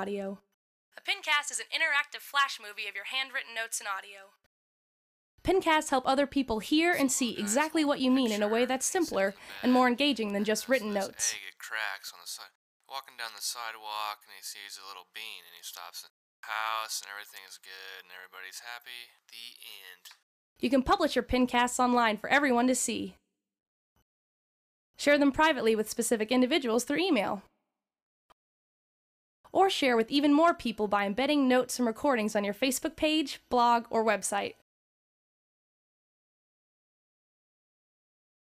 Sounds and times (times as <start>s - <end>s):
Speech: 5.5s - 23.1s, 29.6s - 34.6s.